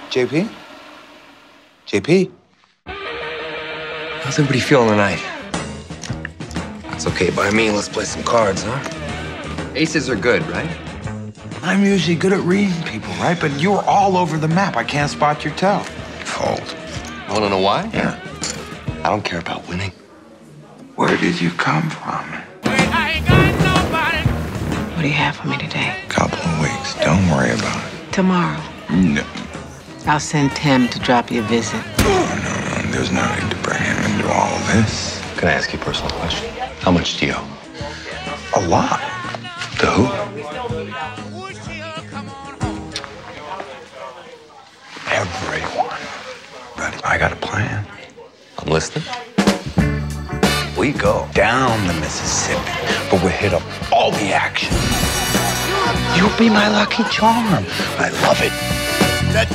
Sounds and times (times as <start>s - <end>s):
Music: 0.0s - 59.5s.